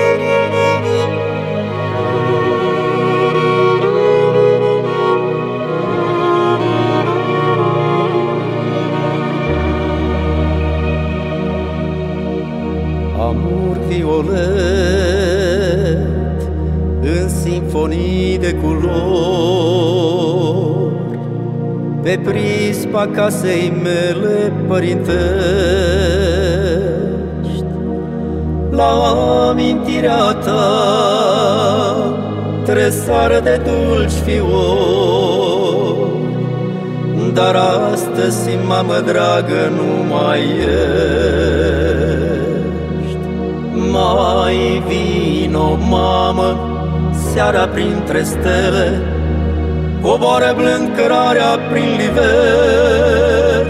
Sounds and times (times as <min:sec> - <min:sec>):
Music: 0:00.0 - 0:53.6.